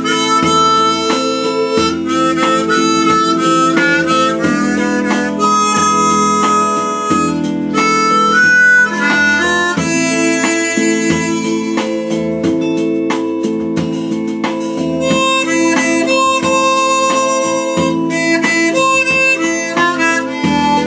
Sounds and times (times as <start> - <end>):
Harmonica: 0.0 - 20.8.